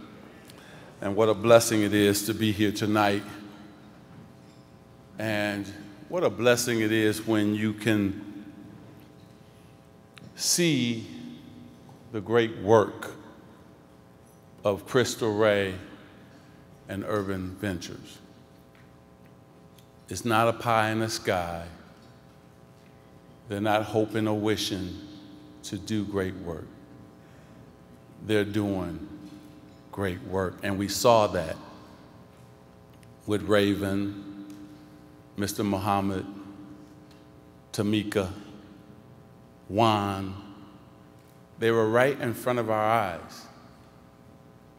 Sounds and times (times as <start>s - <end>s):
Narration, monologue: 0.0s - 44.7s
Male speech, man speaking: 1.0s - 3.5s, 5.2s - 8.3s, 10.4s - 11.2s, 12.1s - 13.2s, 14.7s - 16.0s, 16.9s - 18.2s, 20.1s - 21.8s, 23.5s - 26.7s, 28.2s - 29.1s, 29.9s - 31.8s, 33.2s - 34.4s, 35.4s - 36.5s, 37.7s - 38.4s, 39.7s - 40.5s, 41.6s - 43.6s.